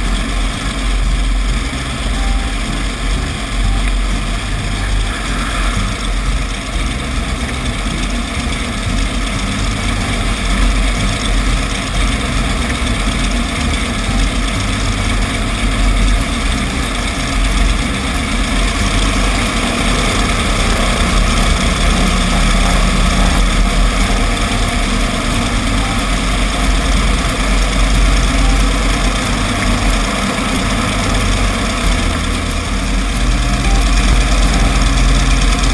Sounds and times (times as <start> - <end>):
Music: 0.0 - 35.7.